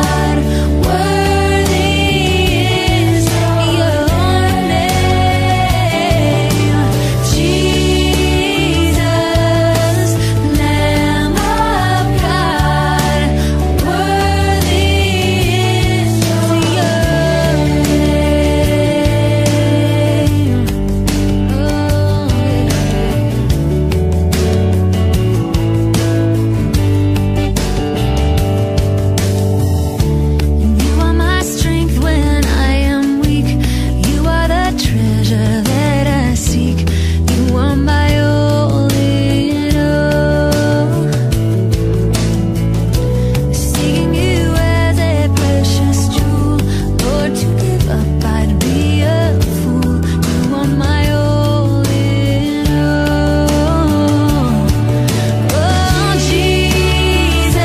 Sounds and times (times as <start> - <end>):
Christian music: 0.0 - 57.6.